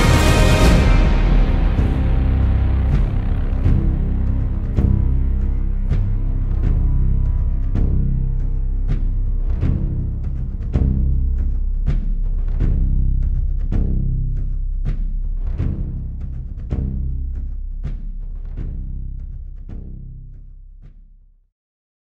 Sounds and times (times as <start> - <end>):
Timpani: 0.0 - 20.4.